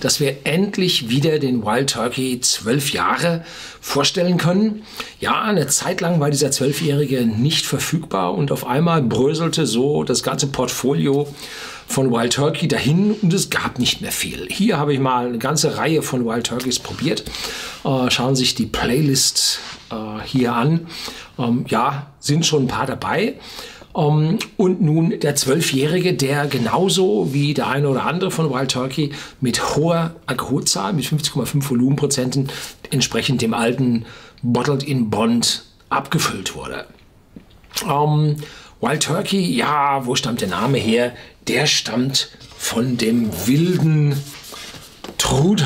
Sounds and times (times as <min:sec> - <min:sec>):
Speech: 0:00.0 - 0:37.0, 0:37.7 - 0:44.5, 0:45.2 - 0:45.6.